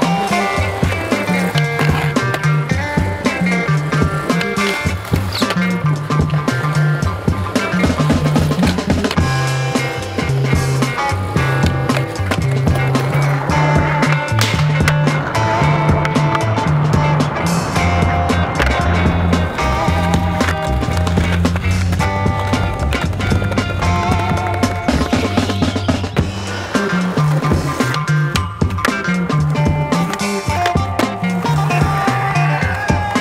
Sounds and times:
Music: 0:00.0 - 0:33.2.

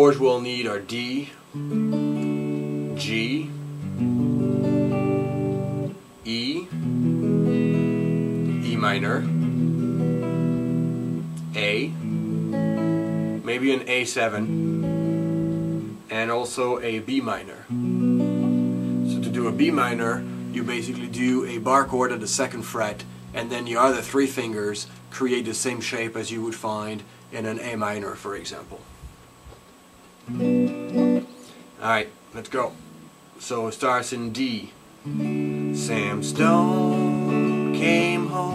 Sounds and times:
Speech: 0:00.0 - 0:01.4, 0:03.0 - 0:03.6, 0:06.2 - 0:06.7, 0:08.6 - 0:09.3, 0:11.5 - 0:12.0, 0:13.4 - 0:14.5, 0:16.1 - 0:17.7, 0:19.1 - 0:28.9, 0:31.8 - 0:32.8, 0:33.4 - 0:34.8, 0:35.8 - 0:36.4
Strum: 0:17.7 - 0:25.9, 0:35.0 - 0:38.5.

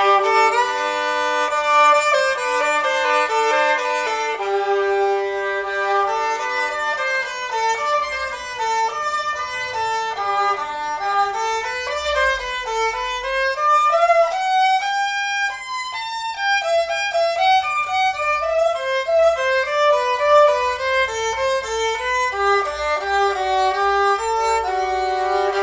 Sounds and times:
Violin, fiddle: 0:00.0 - 0:25.6.

